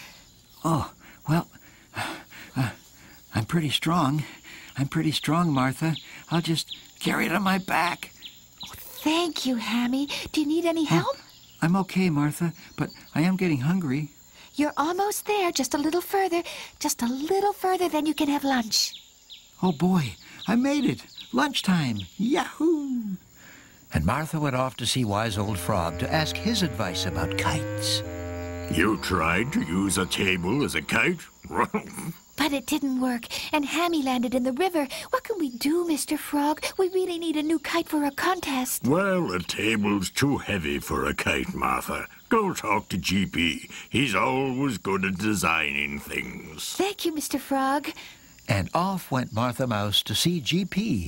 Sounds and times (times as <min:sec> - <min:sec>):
Speech: 0:23.9 - 0:28.0, 0:28.7 - 0:51.0.